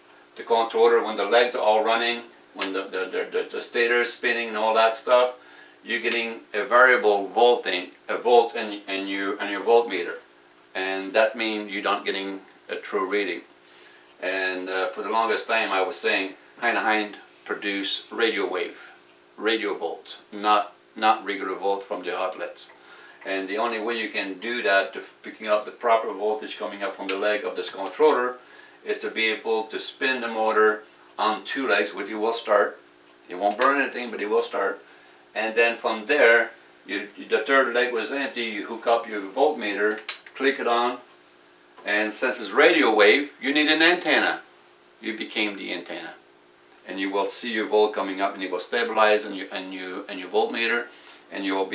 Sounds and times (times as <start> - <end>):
Speech: 0.4 - 13.5, 14.2 - 34.8, 35.4 - 41.1, 41.8 - 46.2, 46.8 - 51.7.